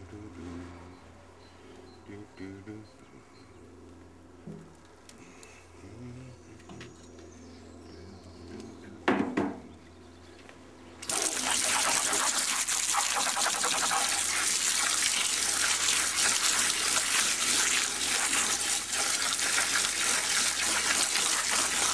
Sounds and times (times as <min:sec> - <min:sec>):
Water: 0:11.0 - 0:21.9.